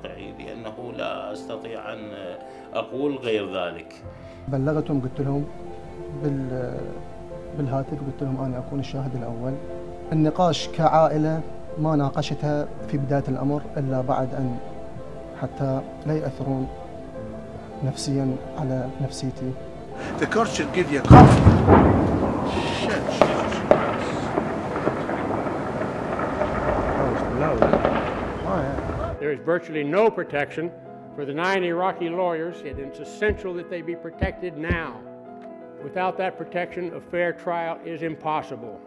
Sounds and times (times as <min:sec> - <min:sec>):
Speech: 0:00.0 - 0:05.5, 0:06.2 - 0:07.0, 0:07.6 - 0:14.6, 0:15.4 - 0:16.7, 0:17.8 - 0:21.4, 0:22.5 - 0:24.3, 0:27.0 - 0:27.8, 0:28.5 - 0:35.0, 0:35.8 - 0:38.8
Music: 0:00.0 - 0:38.8
Outside, urban or manmade: 0:19.6 - 0:29.2
Firecracker: 0:20.0 - 0:29.2.